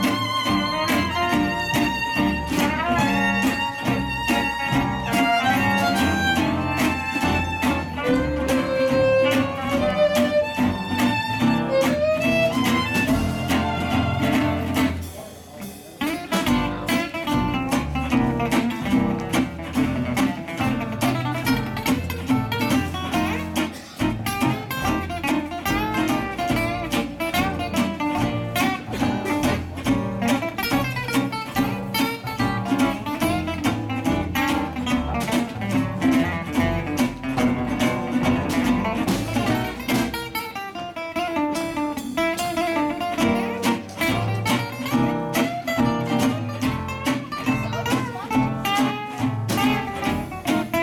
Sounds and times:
Bowed string instrument: 0:00.0 - 0:50.8
Guitar: 0:00.0 - 0:50.8.

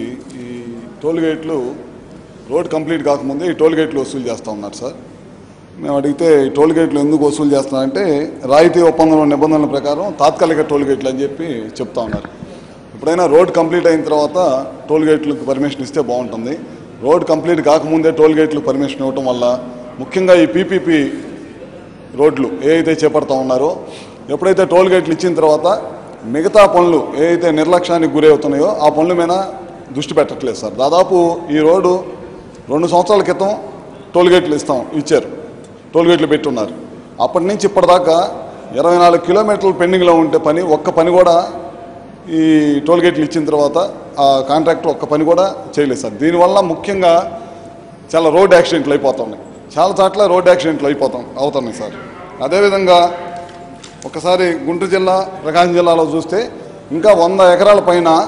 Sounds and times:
Male speech, man speaking: 0:00.0 - 0:01.8, 0:02.5 - 0:05.0, 0:05.8 - 0:12.2, 0:13.0 - 0:21.3, 0:22.1 - 0:35.4, 0:36.0 - 0:47.4, 0:48.1 - 0:53.3, 0:54.0 - 0:58.2
Narration, monologue: 0:00.0 - 0:58.2.

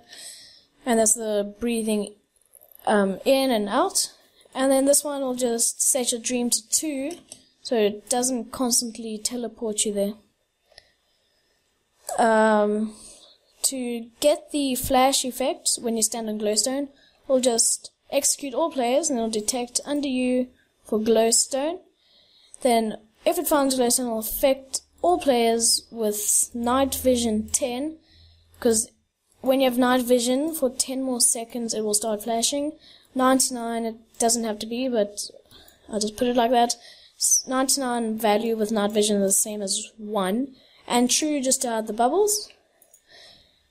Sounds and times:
Speech: 0:00.8 - 0:02.2, 0:02.8 - 0:10.3, 0:12.1 - 0:21.8, 0:22.6 - 0:28.0, 0:28.6 - 0:42.5.

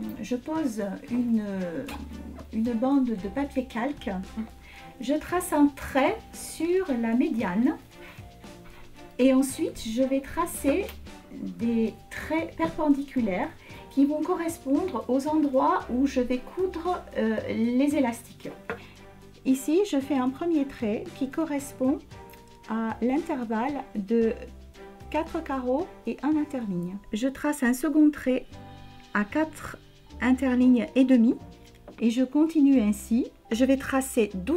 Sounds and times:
Speech: 0:00.0 - 0:07.8, 0:09.2 - 0:18.6, 0:19.5 - 0:22.0, 0:22.7 - 0:24.5, 0:25.1 - 0:28.5, 0:29.1 - 0:31.4, 0:32.0 - 0:34.5
Music: 0:00.0 - 0:34.5.

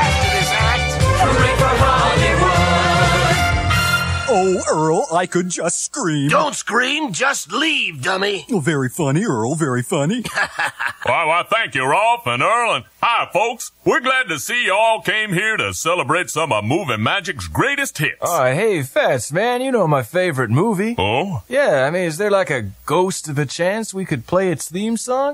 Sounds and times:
Speech: 0:04.3 - 0:10.3, 0:11.1 - 0:25.3.

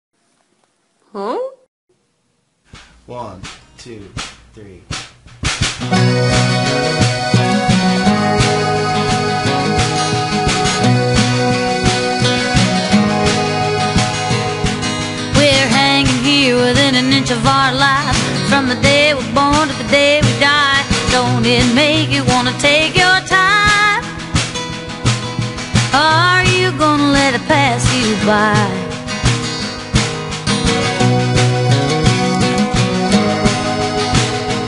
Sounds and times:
Music: 0:02.7 - 0:34.6.

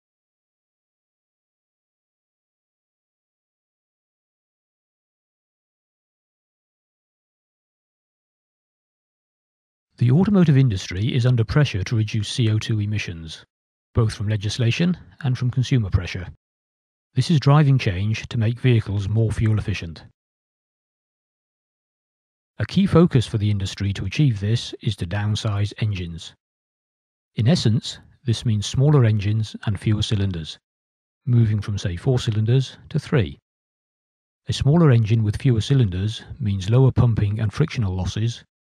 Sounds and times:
Speech: 0:10.0 - 0:16.4, 0:17.2 - 0:20.2, 0:22.6 - 0:26.4, 0:27.4 - 0:30.6, 0:31.3 - 0:33.4, 0:34.5 - 0:38.5.

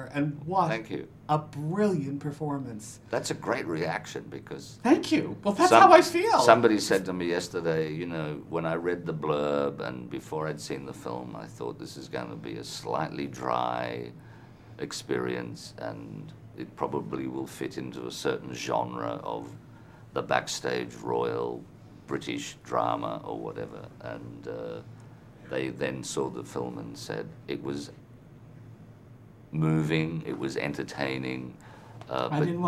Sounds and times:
Male speech, man speaking: 0:00.0 - 0:01.5, 0:03.1 - 0:14.2, 0:14.8 - 0:19.6, 0:20.2 - 0:24.9, 0:25.5 - 0:28.0, 0:29.5 - 0:32.6
Narration, monologue: 0:00.0 - 0:32.6.

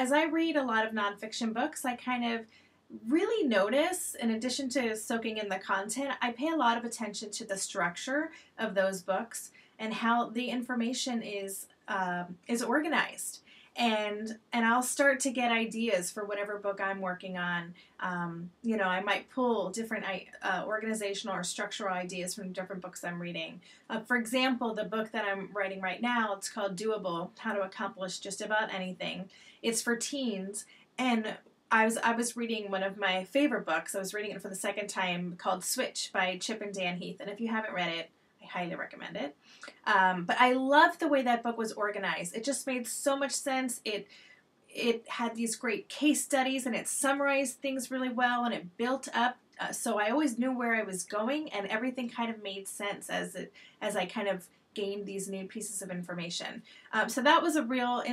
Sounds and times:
Speech: 0:00.0 - 0:44.1, 0:44.7 - 0:58.1.

